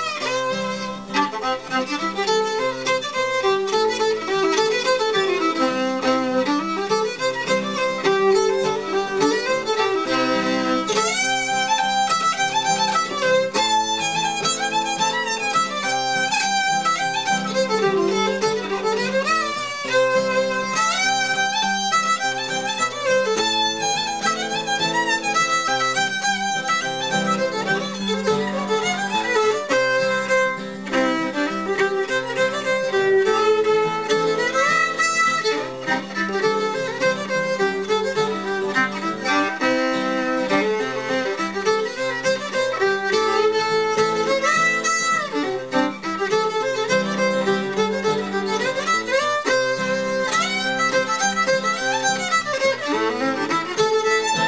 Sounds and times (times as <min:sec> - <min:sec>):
Violin, fiddle: 0:00.0 - 0:54.4.